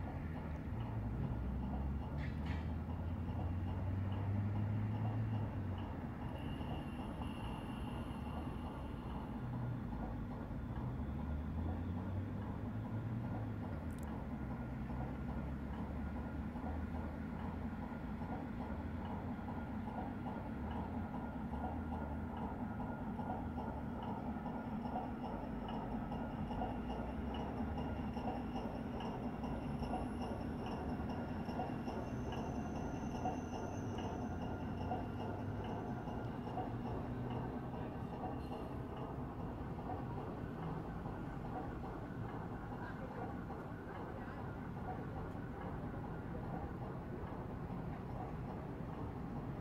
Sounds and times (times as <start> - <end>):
Motorboat, speedboat: 0.0 - 49.6.